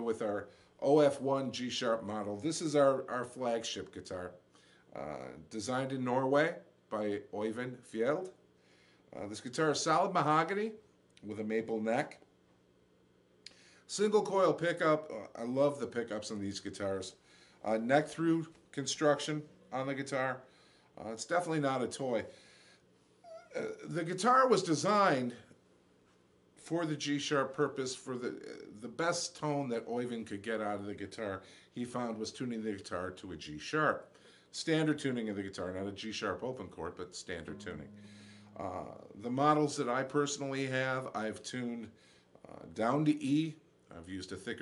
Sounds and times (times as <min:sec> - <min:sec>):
Speech: 0:00.0 - 0:08.4, 0:09.2 - 0:12.3, 0:13.9 - 0:22.3, 0:23.3 - 0:25.5, 0:26.6 - 0:44.6.